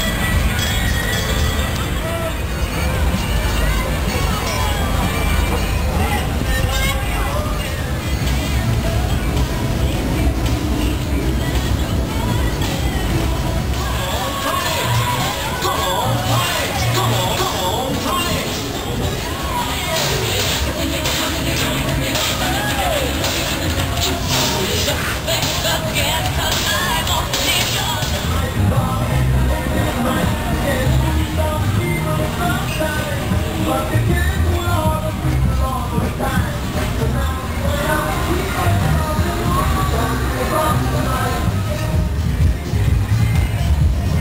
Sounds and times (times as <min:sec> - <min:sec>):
Music: 0:00.0 - 0:44.2
Speech: 0:00.0 - 0:44.2.